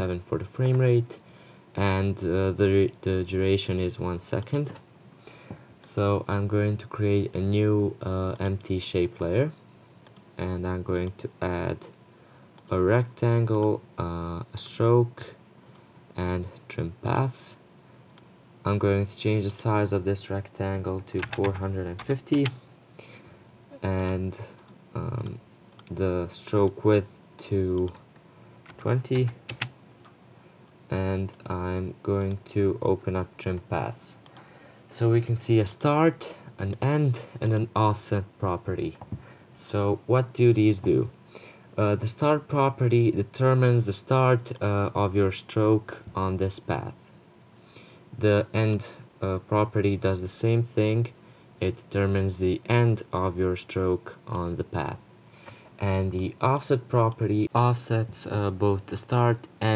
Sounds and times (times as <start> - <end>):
Speech: 0.0 - 1.2, 1.8 - 4.8, 5.8 - 9.6, 10.4 - 12.0, 12.7 - 15.4, 16.2 - 17.6, 18.6 - 22.6, 23.8 - 28.0, 28.8 - 29.4, 30.9 - 34.3, 34.9 - 41.2, 41.8 - 47.1, 48.2 - 55.1, 55.8 - 59.7.